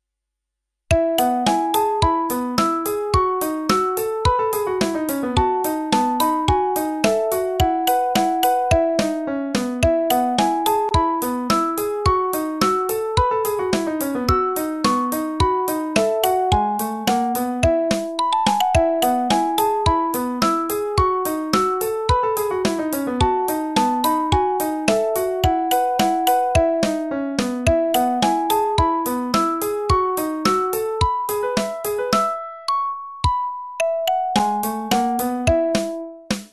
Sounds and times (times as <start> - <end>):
Music: 0.9 - 36.5.